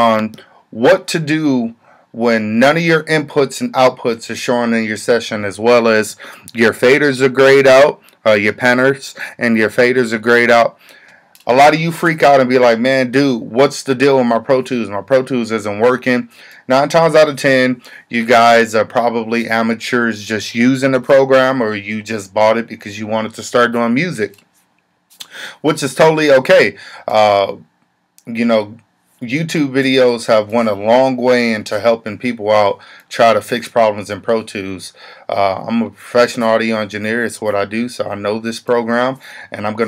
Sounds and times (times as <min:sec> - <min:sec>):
Speech: 0:00.0 - 0:10.8, 0:11.4 - 0:24.4, 0:25.6 - 0:39.8.